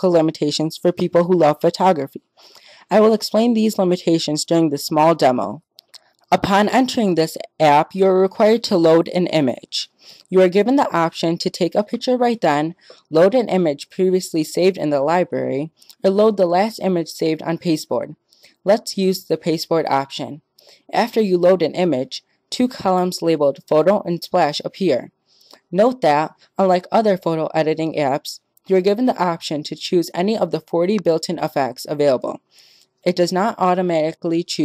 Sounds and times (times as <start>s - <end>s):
Speech: 0.0s - 2.2s, 2.9s - 5.6s, 6.3s - 25.1s, 25.7s - 32.4s, 33.0s - 34.6s.